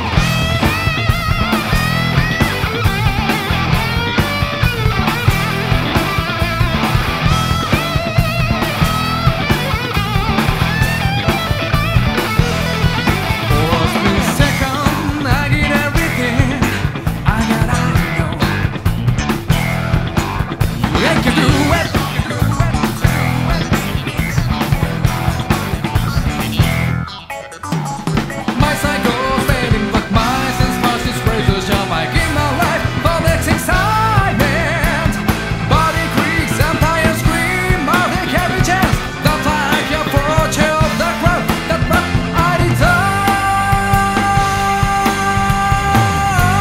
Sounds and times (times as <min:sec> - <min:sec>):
Music: 0:00.0 - 0:46.6.